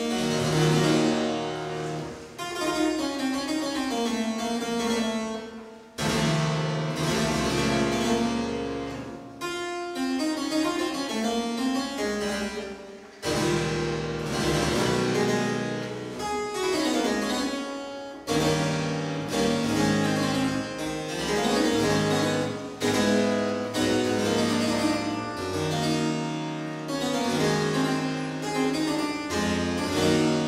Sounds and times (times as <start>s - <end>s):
Harpsichord: 0.0s - 30.4s.